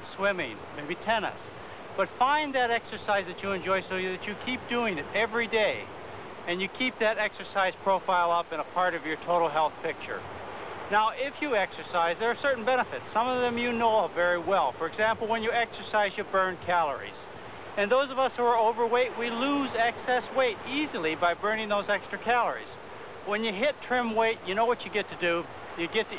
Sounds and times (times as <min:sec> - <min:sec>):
Speech: 0:00.0 - 0:01.4, 0:02.0 - 0:05.9, 0:06.5 - 0:10.2, 0:10.9 - 0:17.2, 0:17.8 - 0:26.1.